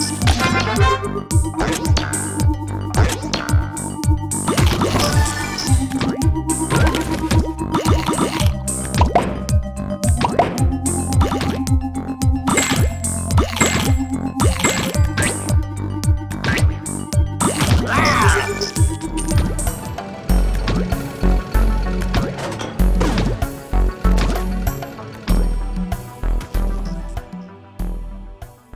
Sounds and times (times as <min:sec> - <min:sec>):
Music: 0:00.0 - 0:28.7.